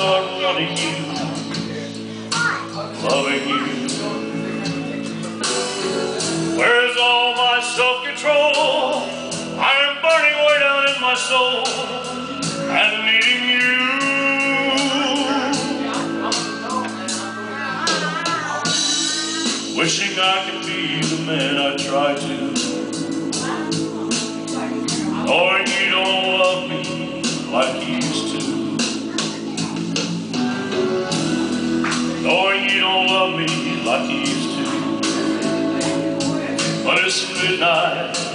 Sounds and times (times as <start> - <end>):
Male singing: 0.0 - 2.0, 2.8 - 4.9, 6.6 - 18.4, 19.8 - 29.4, 31.9 - 38.3
Music: 0.0 - 38.3.